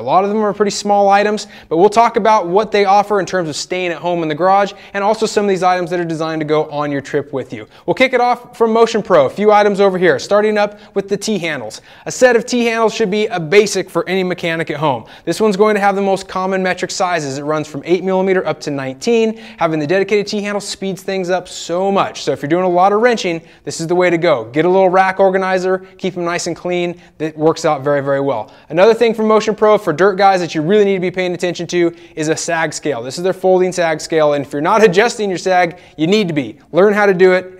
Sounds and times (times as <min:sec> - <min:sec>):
Speech: 0:00.0 - 0:37.5.